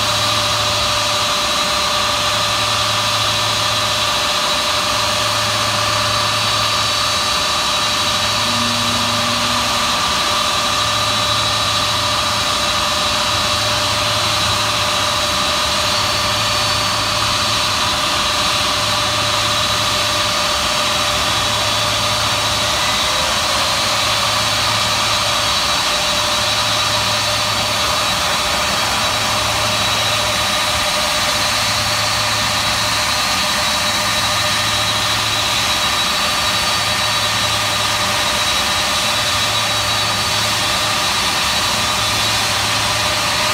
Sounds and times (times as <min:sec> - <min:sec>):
Heavy engine (low frequency): 0:00.0 - 0:43.5
Jet engine: 0:00.0 - 0:43.5
Idling: 0:02.3 - 0:43.5.